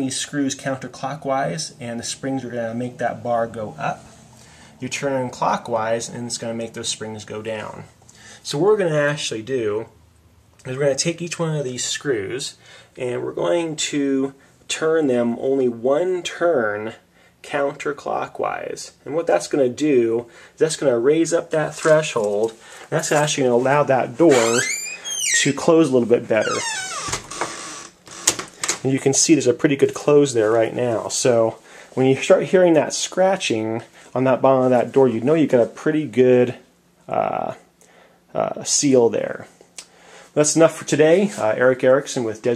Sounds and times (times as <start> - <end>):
Speech: 0.0 - 4.1, 4.8 - 10.0, 10.6 - 26.9, 28.8 - 37.7, 38.3 - 39.6, 40.4 - 42.5.